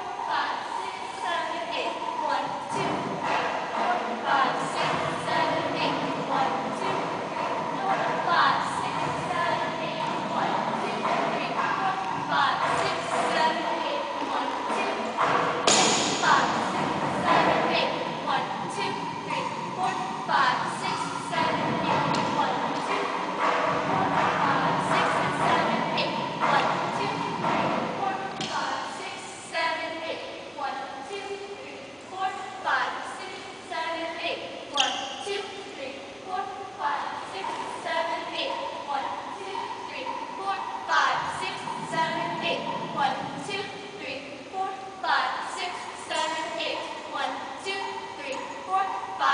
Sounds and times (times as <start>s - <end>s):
Speech: 0.0s - 49.3s.